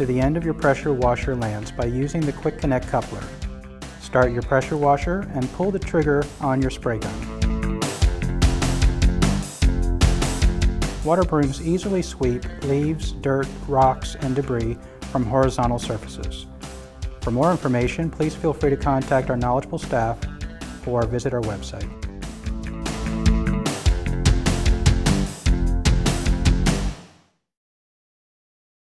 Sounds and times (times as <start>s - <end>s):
Speech: 0.0s - 3.4s, 4.0s - 7.2s, 11.0s - 16.5s, 17.2s - 20.2s, 20.9s - 21.9s
Music: 0.0s - 27.4s.